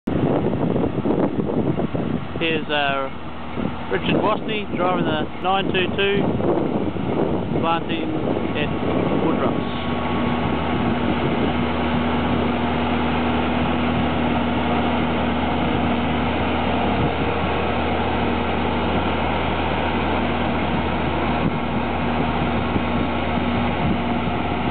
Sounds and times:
Outside, rural or natural: 0:00.0 - 0:24.7
Vehicle: 0:00.0 - 0:24.7
Speech: 0:02.4 - 0:03.1, 0:03.9 - 0:06.3, 0:07.6 - 0:09.9.

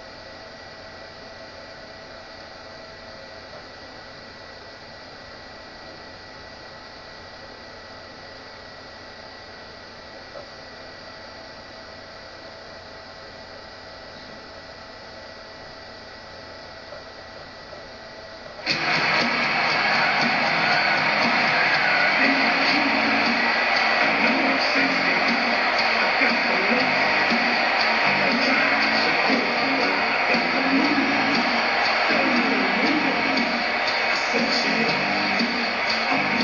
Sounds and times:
Music: 0:18.6 - 0:36.4.

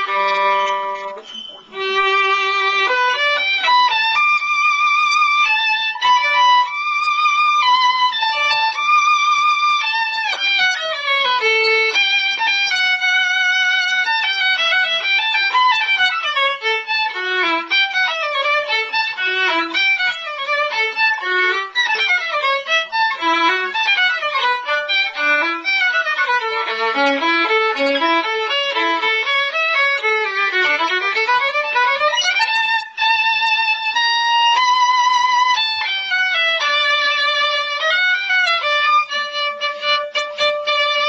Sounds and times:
Violin, fiddle: 0:00.0 - 0:41.0.

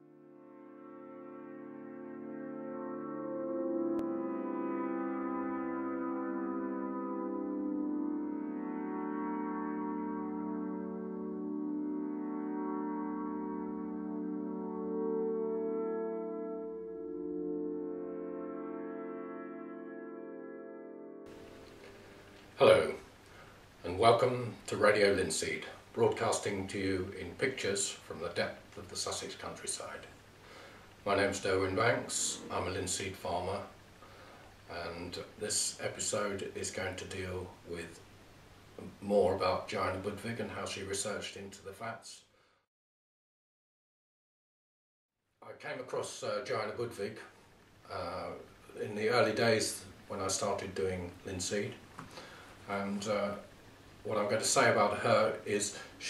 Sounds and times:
Music: 0:00.0 - 0:23.1, 0:31.1 - 0:33.8.

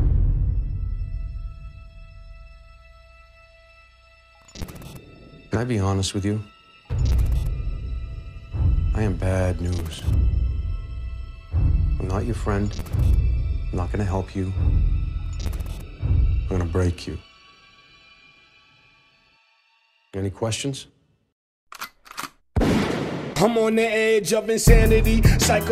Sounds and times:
Scary music: 0:00.0 - 0:20.3
Background music: 0:00.0 - 0:21.2, 0:23.2 - 0:25.7
Speech: 0:05.5 - 0:06.5, 0:08.9 - 0:10.1, 0:12.0 - 0:12.7, 0:13.7 - 0:14.6, 0:16.5 - 0:17.3, 0:20.1 - 0:21.0.

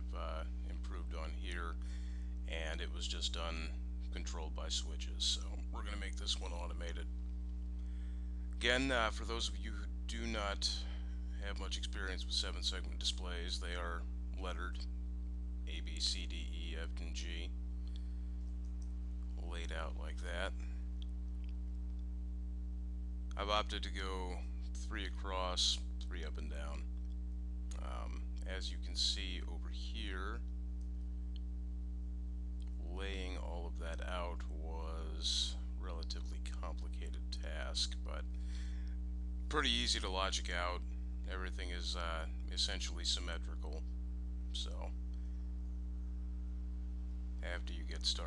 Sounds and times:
Speech: 0:00.0 - 0:01.8, 0:02.5 - 0:07.1, 0:08.6 - 0:14.8, 0:15.7 - 0:17.5, 0:19.4 - 0:20.7, 0:23.3 - 0:26.8, 0:27.7 - 0:30.4, 0:32.8 - 0:38.2, 0:39.5 - 0:43.8, 0:44.5 - 0:45.0, 0:47.4 - 0:48.2.

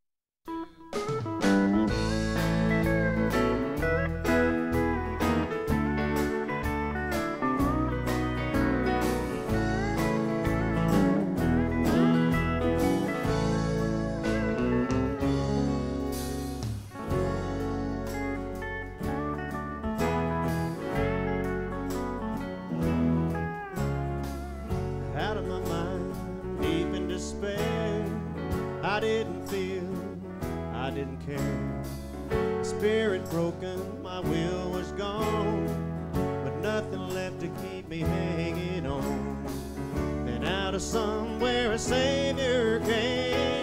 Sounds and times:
Music: 0:00.4 - 0:43.6
Male singing: 0:25.1 - 0:31.8, 0:32.6 - 0:35.8, 0:36.4 - 0:39.5, 0:40.3 - 0:43.6.

